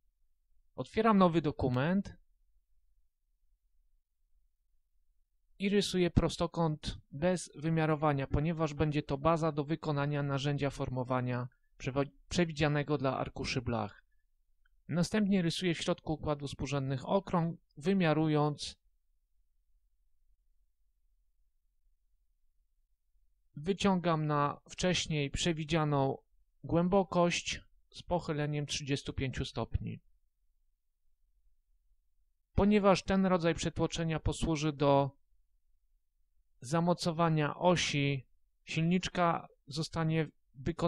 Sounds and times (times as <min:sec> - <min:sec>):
Speech: 0:00.8 - 0:02.2, 0:05.6 - 0:14.0, 0:14.9 - 0:18.8, 0:23.6 - 0:30.1, 0:32.6 - 0:35.2, 0:36.6 - 0:40.8.